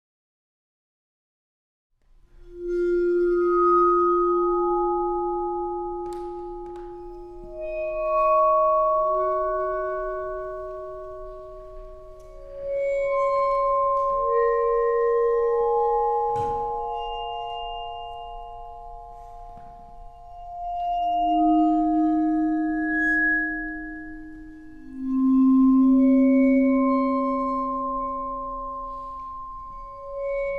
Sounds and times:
Vibraphone: 0:02.5 - 0:30.5.

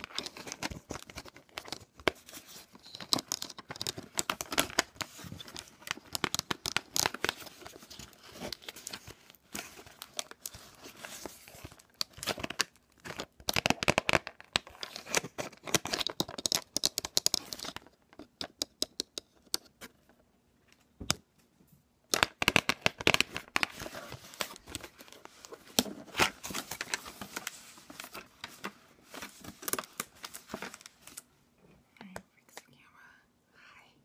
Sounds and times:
Inside, small room: 0:00.0 - 0:34.0.

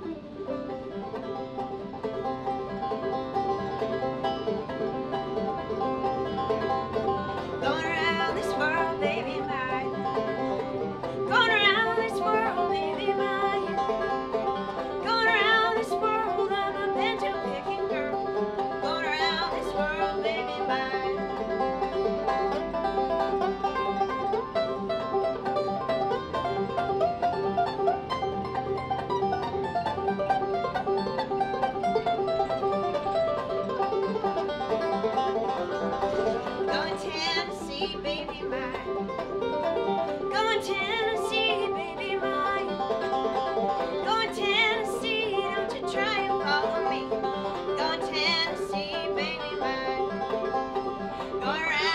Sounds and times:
Music: 0:00.0 - 0:51.9.

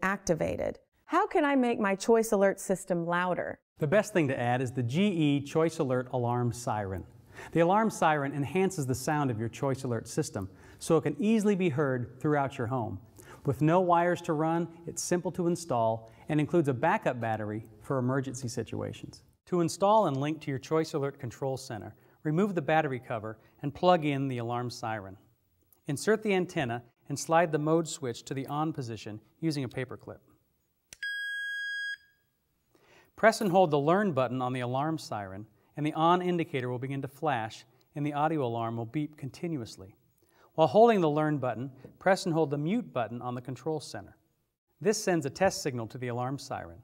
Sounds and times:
Speech: 0:00.0 - 0:25.2, 0:25.9 - 0:30.2, 0:33.2 - 0:40.0, 0:40.6 - 0:44.2, 0:44.8 - 0:46.8.

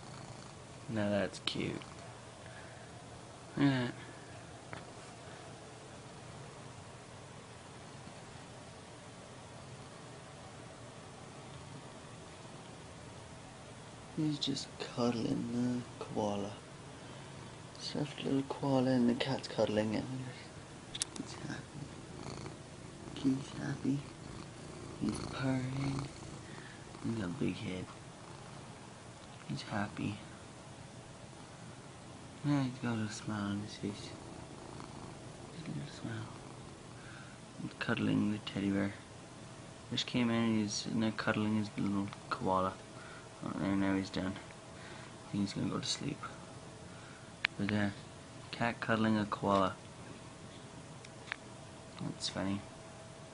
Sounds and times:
Speech: 0:00.9 - 0:01.9, 0:03.6 - 0:04.1, 0:14.2 - 0:16.6, 0:17.8 - 0:20.5, 0:21.1 - 0:21.9, 0:23.2 - 0:24.1, 0:25.0 - 0:26.1, 0:27.0 - 0:28.0, 0:29.4 - 0:30.3, 0:32.4 - 0:34.2, 0:35.5 - 0:36.4, 0:37.6 - 0:39.1, 0:39.9 - 0:42.8, 0:43.4 - 0:44.5, 0:45.3 - 0:46.4, 0:47.6 - 0:49.8, 0:52.0 - 0:52.7.

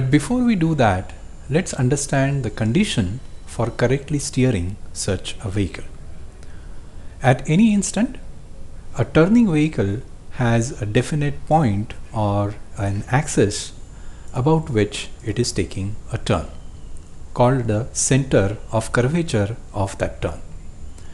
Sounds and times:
Speech: 0:00.0 - 0:05.9, 0:07.2 - 0:08.3, 0:09.0 - 0:13.8, 0:14.4 - 0:16.6, 0:17.4 - 0:20.6.

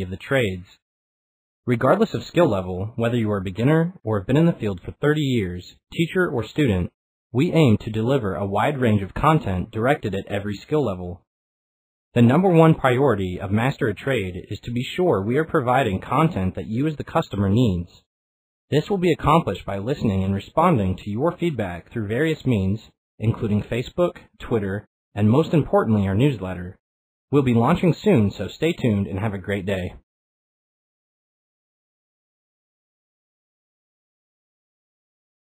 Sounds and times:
Speech synthesizer: 0:00.0 - 0:00.8, 0:01.7 - 0:11.2, 0:12.2 - 0:18.0, 0:18.7 - 0:26.8, 0:27.4 - 0:30.0.

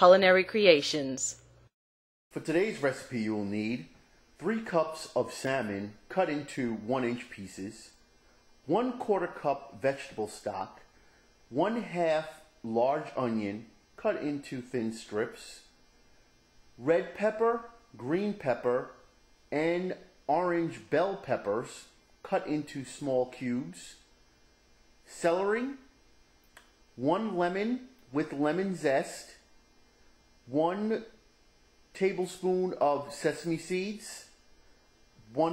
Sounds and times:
Speech: 0:00.0 - 0:01.4, 0:02.3 - 0:08.0, 0:08.7 - 0:10.9, 0:11.5 - 0:15.8, 0:16.8 - 0:24.1, 0:25.1 - 0:25.9, 0:27.0 - 0:29.5, 0:30.5 - 0:31.2, 0:32.0 - 0:34.4, 0:35.2 - 0:35.5.

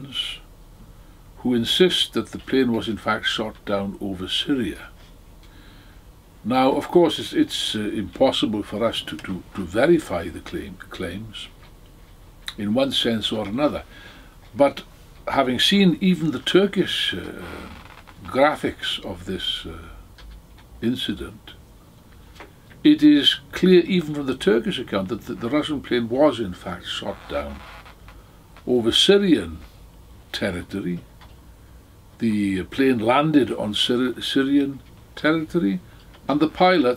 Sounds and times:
Speech: 0:00.0 - 0:00.5, 0:01.4 - 0:05.0, 0:06.4 - 0:11.6, 0:12.5 - 0:13.9, 0:14.5 - 0:20.0, 0:20.8 - 0:21.6, 0:22.8 - 0:27.7, 0:28.6 - 0:29.7, 0:30.3 - 0:31.1, 0:32.2 - 0:36.9.

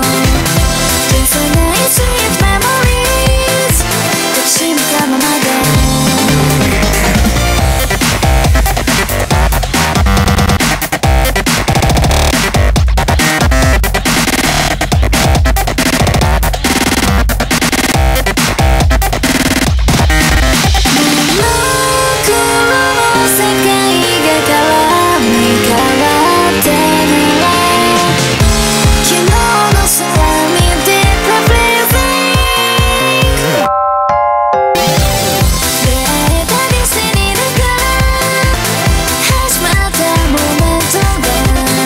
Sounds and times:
Dubstep: 0:00.0 - 0:33.7.

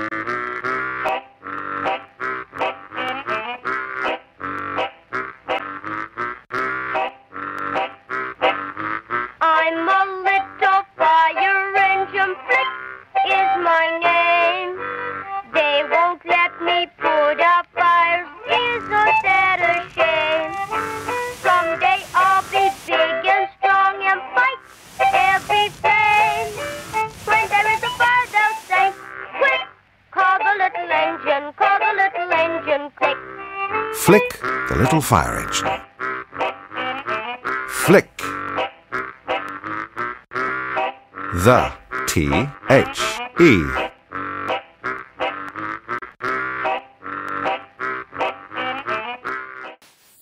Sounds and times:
Music: 0:00.0 - 0:49.8
Speech: 0:34.0 - 0:35.8, 0:37.7 - 0:38.4, 0:41.4 - 0:43.9.

